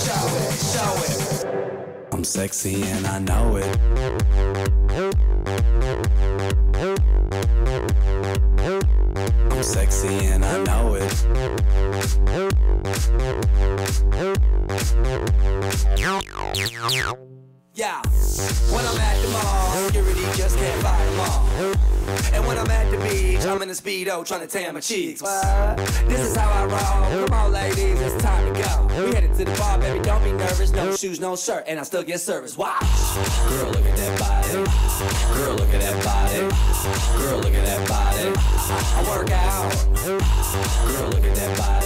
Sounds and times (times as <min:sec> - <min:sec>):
Music: 0:00.0 - 0:23.8, 0:25.3 - 0:31.0, 0:32.8 - 0:41.8.